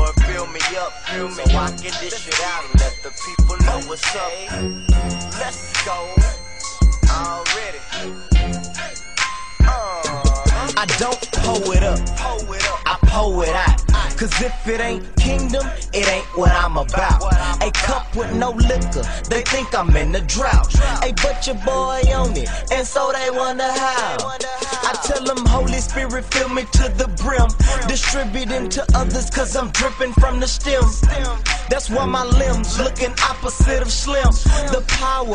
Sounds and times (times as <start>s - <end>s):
Music: 0.0s - 35.3s.